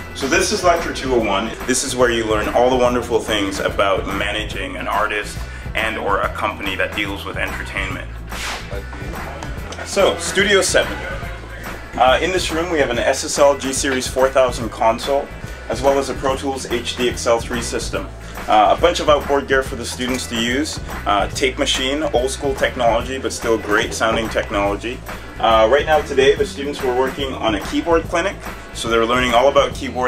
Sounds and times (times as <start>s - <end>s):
Music: 0.0s - 30.0s
Speech: 0.2s - 30.0s.